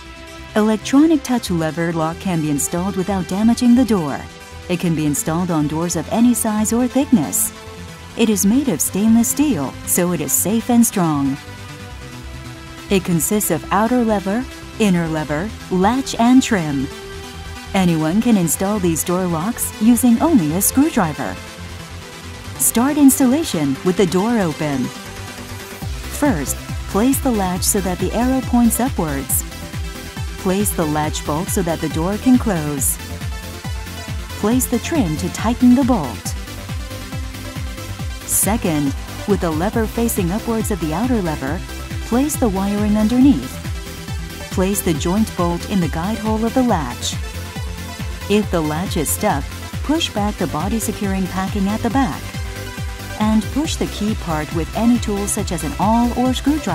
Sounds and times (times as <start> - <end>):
Music: 0.0 - 56.7
Speech: 0.6 - 7.5, 8.2 - 11.4, 12.9 - 16.9, 17.8 - 21.4, 22.6 - 24.9, 26.1 - 29.4, 30.4 - 33.0, 34.4 - 36.4, 38.3 - 43.6, 44.6 - 47.2, 48.3 - 52.3, 53.2 - 56.7.